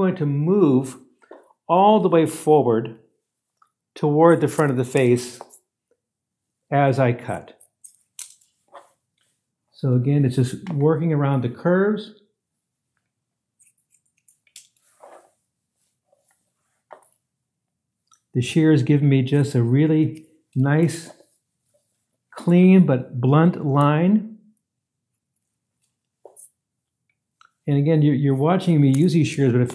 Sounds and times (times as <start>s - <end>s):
Speech: 0.0s - 1.0s, 1.7s - 3.0s, 4.0s - 5.5s, 6.7s - 7.6s, 9.8s - 12.2s, 18.4s - 21.2s, 22.4s - 24.4s, 27.6s - 29.7s.